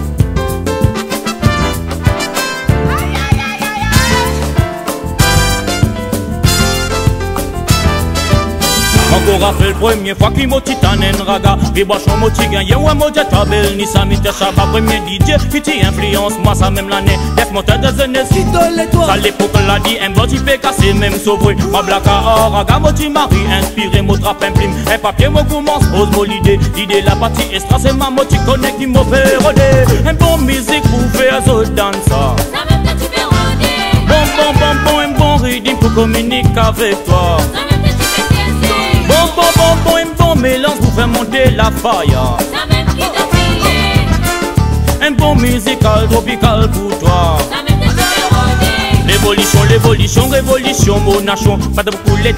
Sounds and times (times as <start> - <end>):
Music: 0.0 - 52.3.